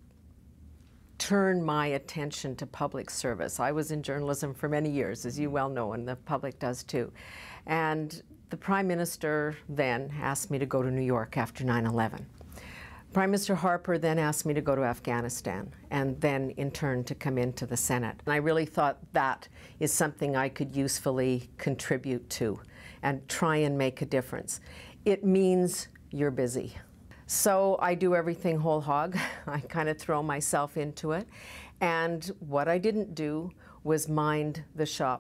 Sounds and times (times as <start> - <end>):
Inside, small room: 0.0 - 35.2
Speech: 1.2 - 7.1, 7.7 - 12.3, 13.2 - 35.2.